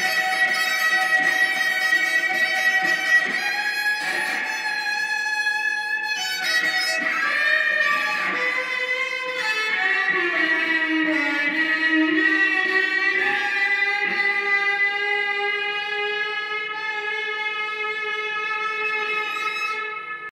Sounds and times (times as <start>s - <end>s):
Violin, fiddle: 0.0s - 20.3s.